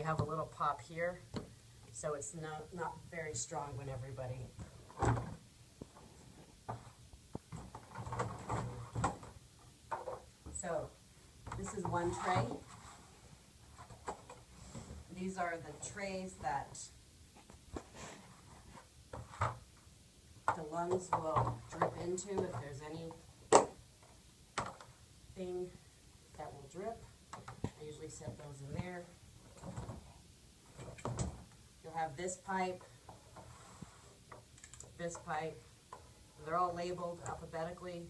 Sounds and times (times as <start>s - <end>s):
Speech: 0.0s - 1.4s, 2.0s - 4.6s, 10.5s - 12.7s, 15.1s - 17.0s, 20.5s - 23.2s, 25.4s - 27.1s, 27.7s - 29.2s, 31.8s - 32.9s, 35.0s - 35.6s, 36.4s - 38.1s
Inside, small room: 0.0s - 38.1s.